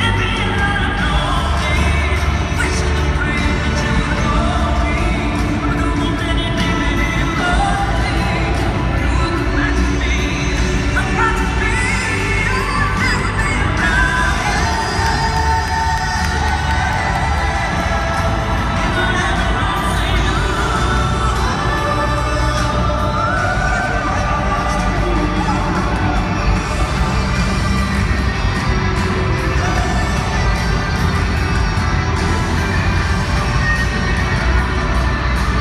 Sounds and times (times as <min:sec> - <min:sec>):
Exciting music: 0:00.0 - 0:35.6.